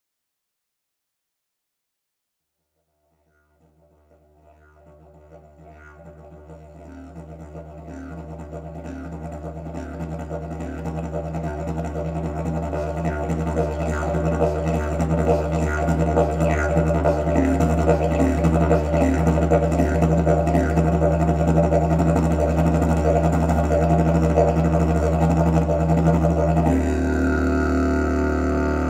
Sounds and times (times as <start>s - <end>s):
Didgeridoo: 3.4s - 28.8s.